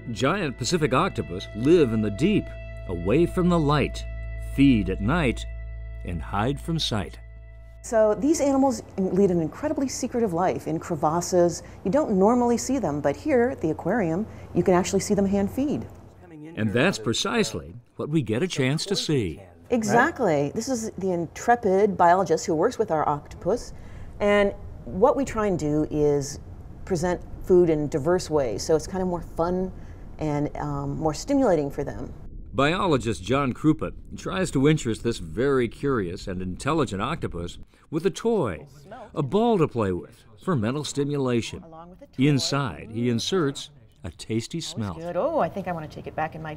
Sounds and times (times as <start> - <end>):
Speech: 0.0 - 4.0, 4.6 - 5.4, 6.1 - 7.2, 7.9 - 46.5.